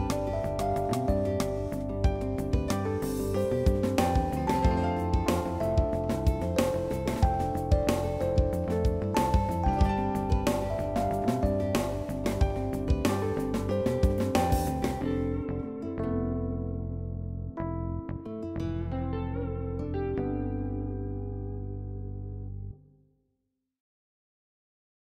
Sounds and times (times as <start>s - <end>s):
Music: 0.0s - 23.1s.